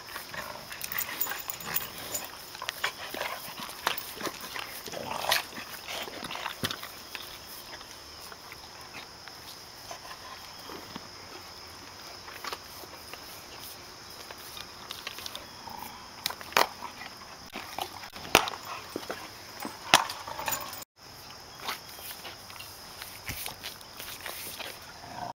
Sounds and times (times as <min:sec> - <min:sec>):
Animal: 0:00.0 - 0:20.8.